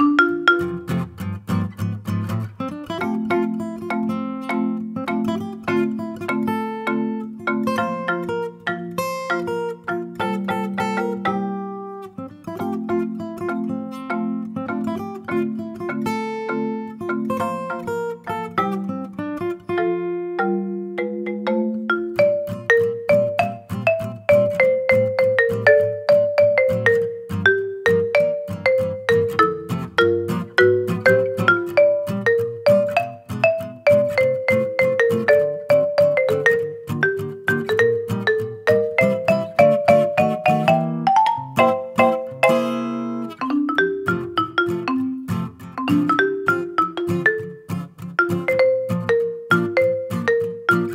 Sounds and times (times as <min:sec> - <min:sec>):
Acoustic guitar: 0:00.0 - 0:50.9.